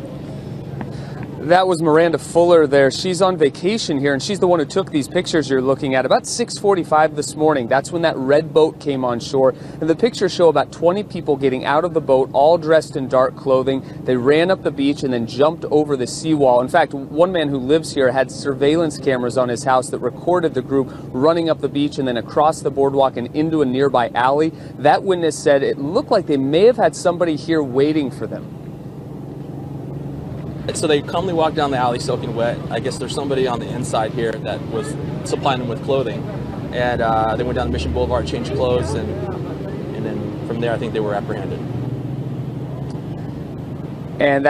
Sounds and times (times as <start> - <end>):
Speech: 1.2 - 28.5, 30.7 - 41.6, 44.2 - 44.4.